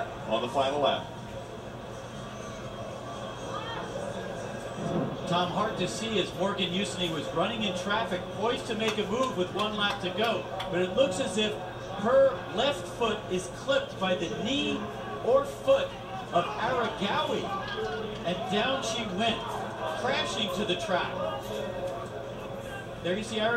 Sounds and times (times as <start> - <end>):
Speech: 5.3 - 21.8.